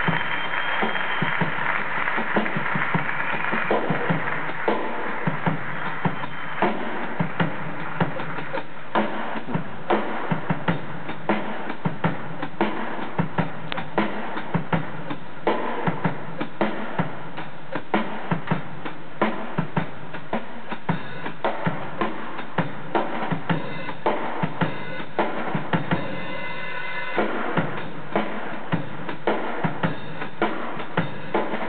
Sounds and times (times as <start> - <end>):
Drum: 0.0 - 31.6
Drum kit: 0.0 - 31.6.